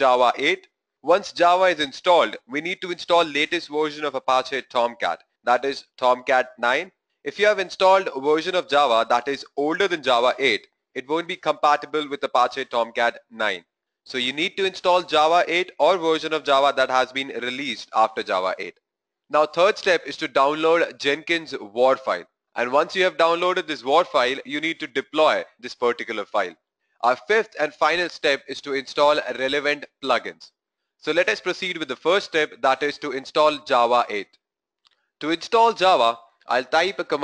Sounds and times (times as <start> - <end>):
Speech: 0.0 - 18.7, 19.3 - 30.5, 31.1 - 34.3, 35.2 - 37.2.